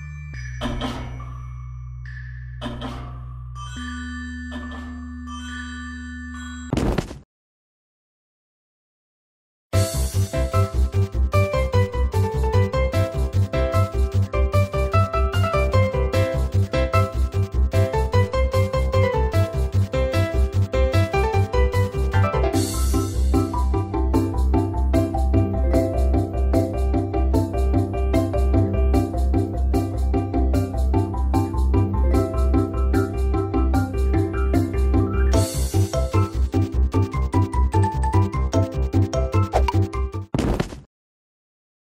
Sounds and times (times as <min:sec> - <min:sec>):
Music: 0:00.0 - 0:06.8, 0:09.7 - 0:40.4.